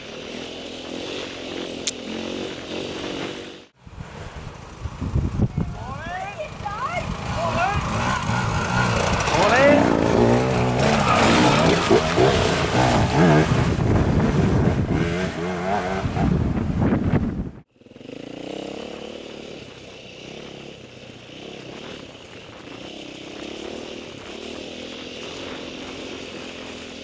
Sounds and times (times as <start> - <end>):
Motorcycle: 0.0 - 27.0
Outside, rural or natural: 0.0 - 27.0
Speech: 5.5 - 7.9, 9.3 - 9.9.